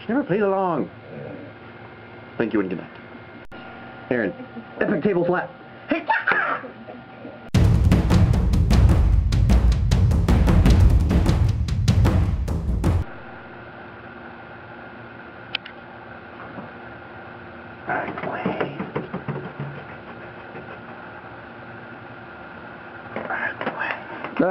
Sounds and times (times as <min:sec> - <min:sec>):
Music: 0:07.6 - 0:13.1.